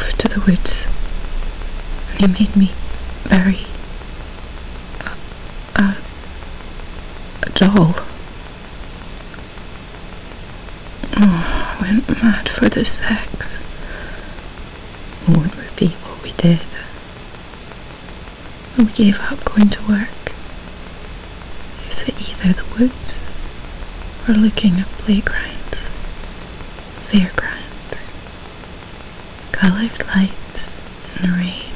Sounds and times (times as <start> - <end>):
Speech: 0.0 - 0.9, 2.1 - 3.8, 5.8 - 6.1, 7.4 - 8.2, 11.0 - 13.6, 15.2 - 17.0, 18.7 - 20.4, 21.8 - 23.3, 24.2 - 25.9, 27.0 - 28.1, 29.5 - 31.7
Inside, small room: 0.0 - 31.7.